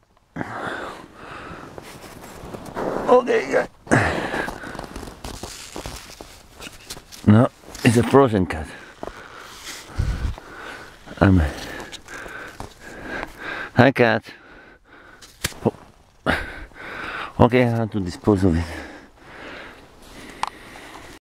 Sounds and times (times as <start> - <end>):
Speech: 3.1 - 3.7, 7.3 - 8.8, 11.2 - 11.6, 13.8 - 14.4, 17.4 - 18.9.